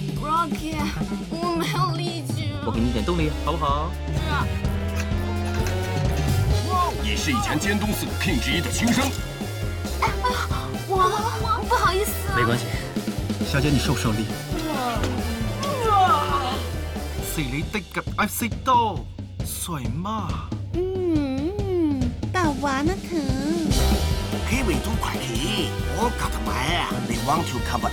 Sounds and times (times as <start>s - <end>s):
Music: 0.0s - 27.9s
Speech: 17.3s - 23.8s, 24.5s - 27.9s.